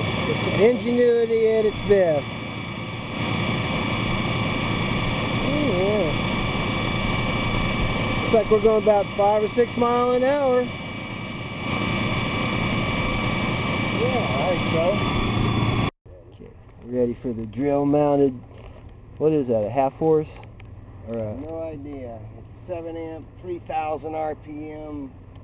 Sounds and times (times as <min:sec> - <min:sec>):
Engine: 0:00.0 - 0:25.4
Outside, rural or natural: 0:00.0 - 0:25.4
Speech: 0:00.3 - 0:02.3, 0:05.4 - 0:06.2, 0:08.3 - 0:10.7, 0:14.0 - 0:15.0, 0:16.1 - 0:18.4, 0:19.2 - 0:20.4, 0:21.0 - 0:25.1.